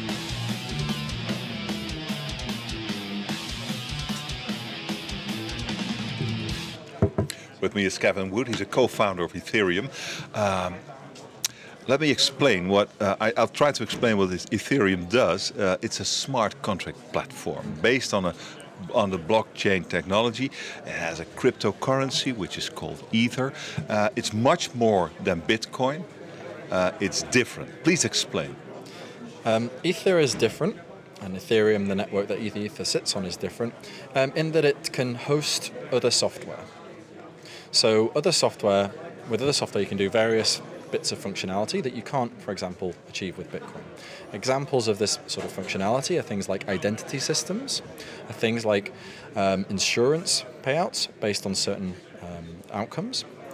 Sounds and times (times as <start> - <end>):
Speech: 6.8 - 53.5.